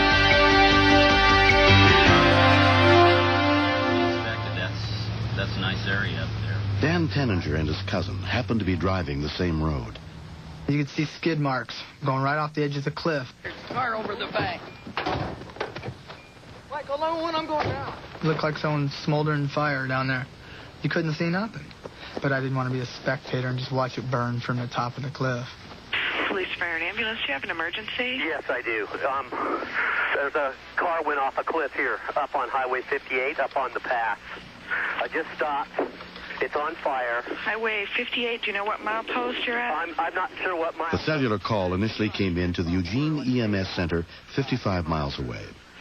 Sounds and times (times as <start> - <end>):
Speech: 36.4 - 45.6.